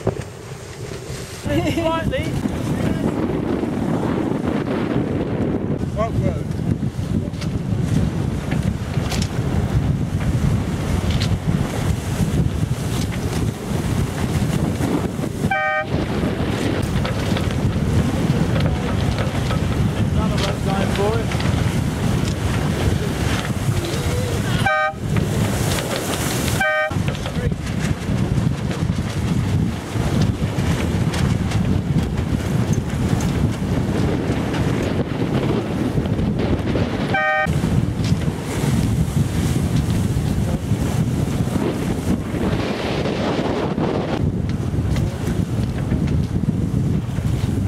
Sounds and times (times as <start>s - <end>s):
Sailboat, sailing ship: 0.0s - 47.6s
Waves, surf: 0.0s - 47.6s
Wind noise (microphone): 0.0s - 47.6s.